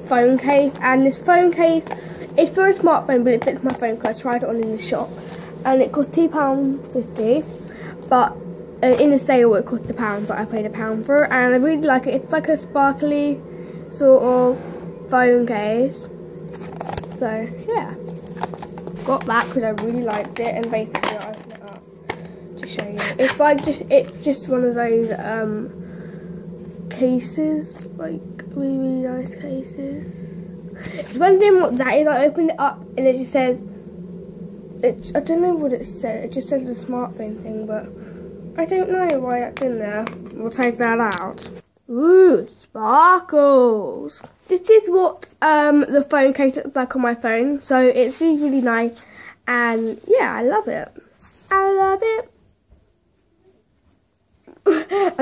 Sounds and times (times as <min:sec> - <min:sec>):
Speech: 0:00.0 - 0:13.4, 0:14.0 - 0:16.1, 0:17.2 - 0:18.0, 0:19.0 - 0:21.8, 0:22.6 - 0:25.7, 0:26.9 - 0:30.1, 0:30.8 - 0:33.6, 0:34.8 - 0:37.9, 0:38.6 - 0:52.3, 0:54.7 - 0:55.2.